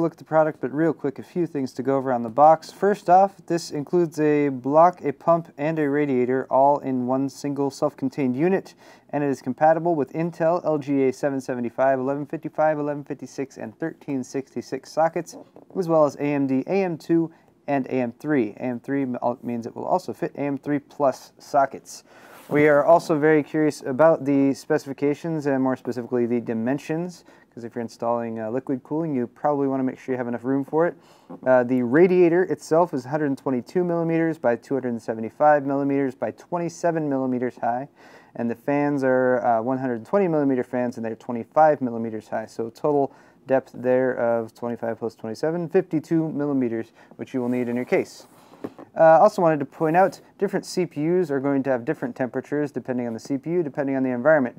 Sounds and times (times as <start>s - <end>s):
Speech: 0.0s - 54.5s.